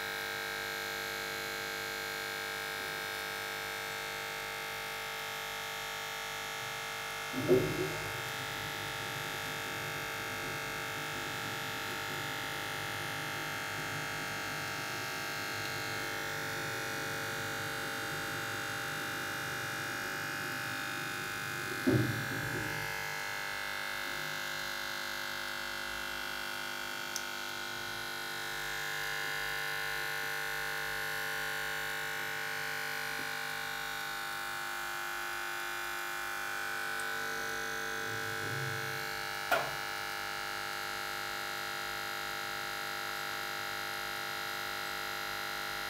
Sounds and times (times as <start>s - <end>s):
Electric shaver, electric razor: 0.0s - 45.9s.